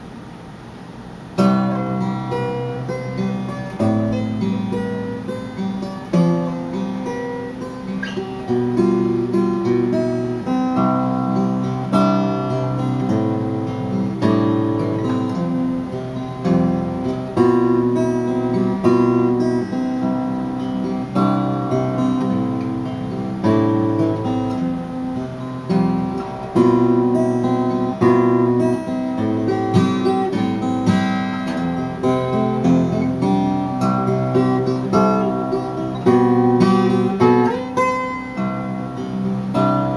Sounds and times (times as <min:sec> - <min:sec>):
Strum: 0:01.2 - 0:39.9.